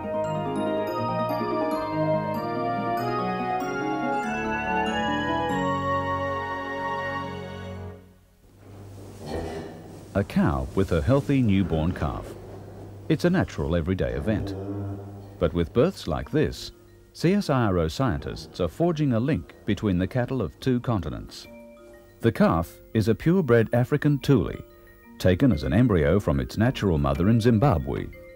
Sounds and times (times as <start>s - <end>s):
Speech: 10.2s - 12.4s, 13.1s - 14.6s, 15.4s - 21.5s, 22.2s - 28.2s.